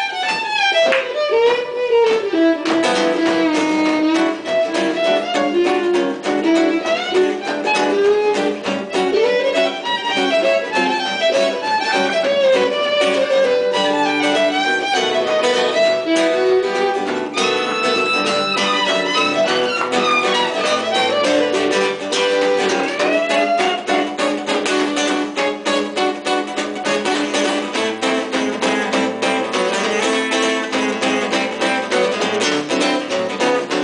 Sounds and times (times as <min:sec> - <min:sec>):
Violin, fiddle: 0:00.0 - 0:24.3.